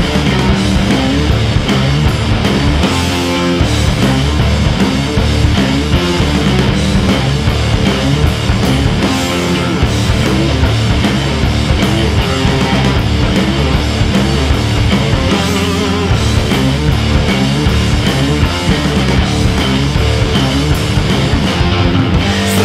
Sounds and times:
Punk rock: 0:00.0 - 0:22.6.

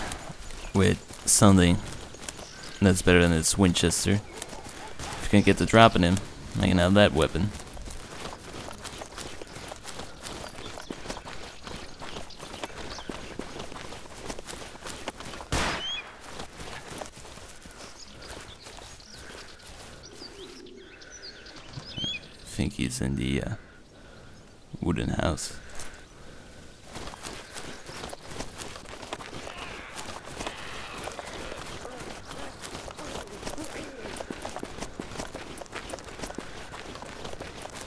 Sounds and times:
Outside, rural or natural: 0:00.0 - 0:37.8
Speech: 0:00.7 - 0:01.9, 0:02.8 - 0:04.3, 0:05.1 - 0:07.6, 0:22.5 - 0:23.6, 0:24.7 - 0:25.6.

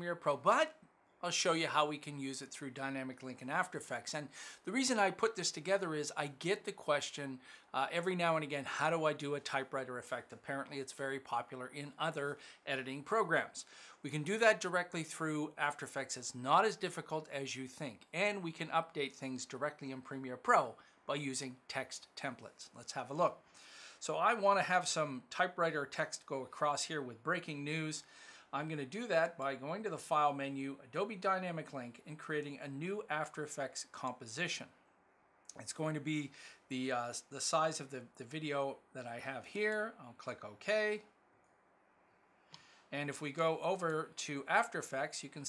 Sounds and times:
Speech: 0:00.0 - 0:23.4, 0:24.0 - 0:34.8, 0:35.5 - 0:41.1, 0:42.9 - 0:45.4.

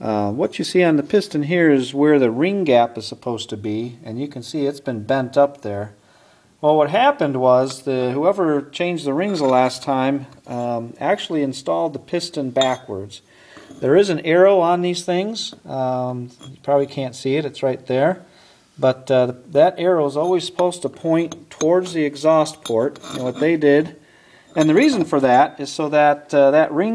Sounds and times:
Speech: 0:00.0 - 0:06.0, 0:06.6 - 0:13.2, 0:13.8 - 0:24.0, 0:24.6 - 0:26.9.

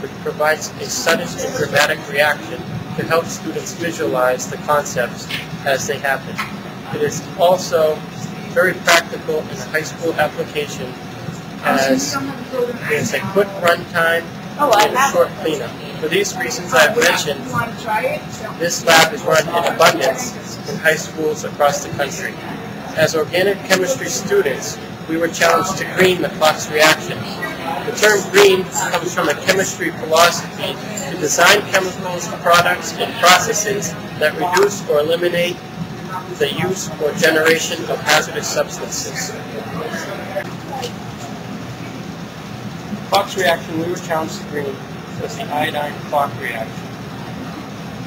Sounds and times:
Speech: 0:00.0 - 0:11.0, 0:11.6 - 0:41.1, 0:43.1 - 0:46.8.

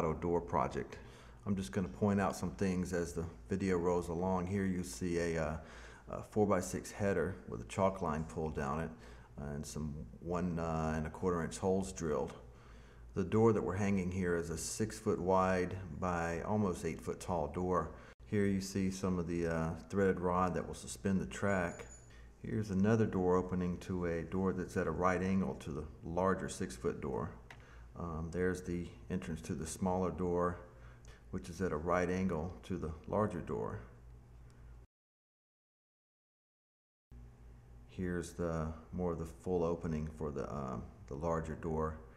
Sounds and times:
Speech: 0:00.0 - 0:12.5, 0:13.1 - 0:27.4, 0:28.0 - 0:30.7, 0:31.3 - 0:34.0, 0:37.9 - 0:42.1.

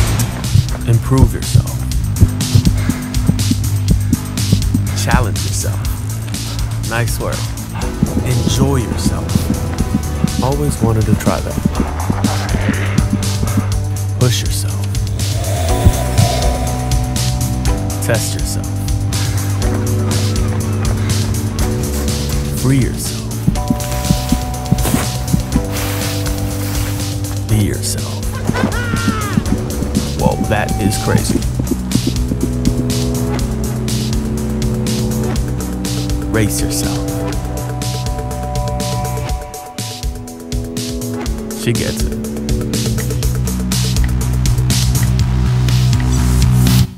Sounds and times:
Music: 0:00.0 - 0:46.9
Speech: 0:00.8 - 0:01.9, 0:04.9 - 0:06.0, 0:06.8 - 0:07.5, 0:08.1 - 0:09.5, 0:10.4 - 0:11.6, 0:14.2 - 0:15.0, 0:18.0 - 0:18.8, 0:22.6 - 0:23.2, 0:27.5 - 0:28.3, 0:30.2 - 0:31.5, 0:36.3 - 0:37.1, 0:41.6 - 0:42.1.

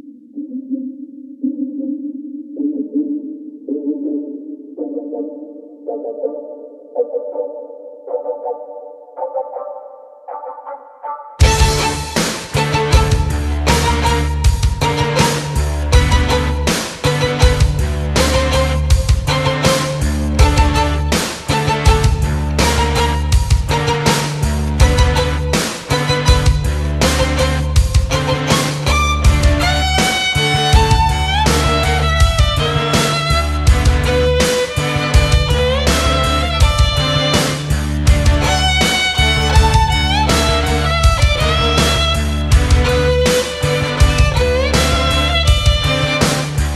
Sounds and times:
Violin, fiddle: 0:11.4 - 0:37.7, 0:38.3 - 0:46.6.

